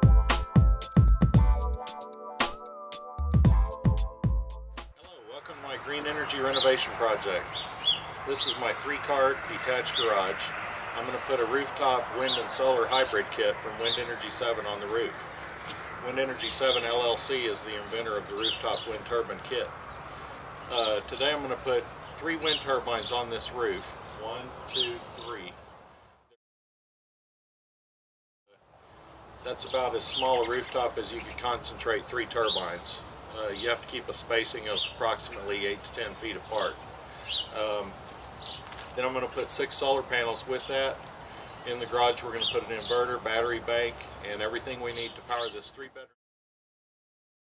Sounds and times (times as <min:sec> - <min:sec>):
Speech: 0:05.0 - 0:07.6, 0:08.3 - 0:15.2, 0:16.0 - 0:19.8, 0:20.7 - 0:25.6, 0:29.4 - 0:36.8, 0:37.5 - 0:38.0, 0:38.9 - 0:41.0, 0:41.7 - 0:46.2
Rustling leaves: 0:05.1 - 0:26.2, 0:28.6 - 0:45.6.